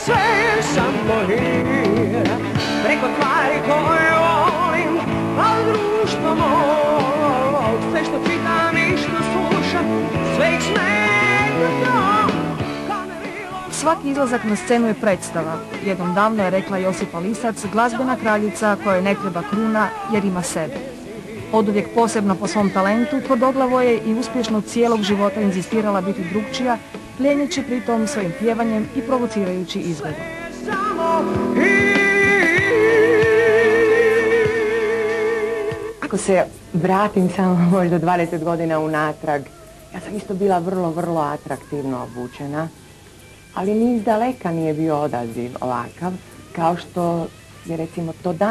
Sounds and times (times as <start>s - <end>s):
Music: 0.0s - 48.5s
Speech: 13.7s - 20.9s, 21.5s - 30.2s, 36.0s - 42.8s, 43.6s - 48.5s.